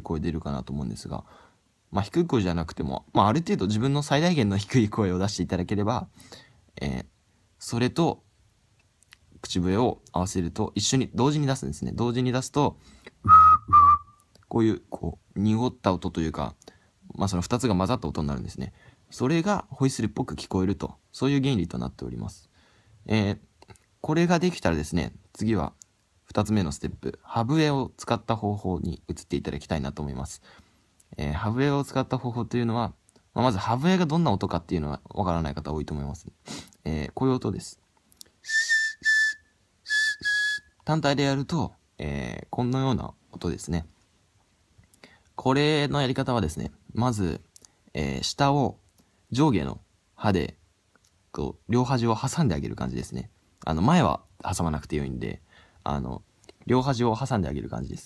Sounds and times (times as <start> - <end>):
Speech: 0.0 - 1.3, 1.9 - 6.1, 6.8 - 8.3, 9.4 - 12.8, 14.4 - 30.4, 31.1 - 37.8, 40.8 - 44.0, 45.4 - 50.6, 51.3 - 58.0
Whistling: 13.2 - 14.2, 38.4 - 40.9.